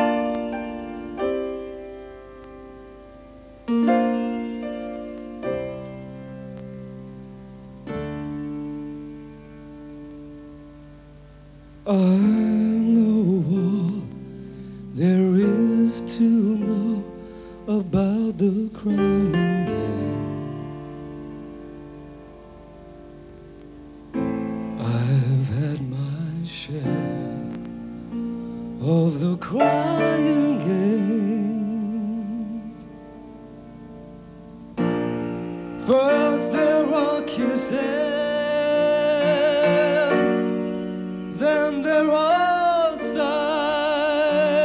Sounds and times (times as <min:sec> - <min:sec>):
Music: 0:00.0 - 0:44.6.